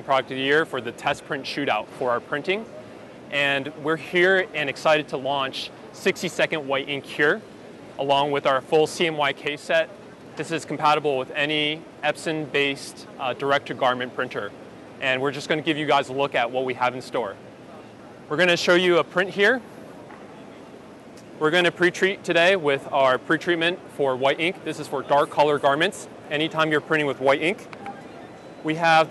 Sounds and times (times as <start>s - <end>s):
Speech: 0.0s - 7.4s, 8.0s - 17.4s, 18.3s - 19.6s, 21.4s - 29.1s.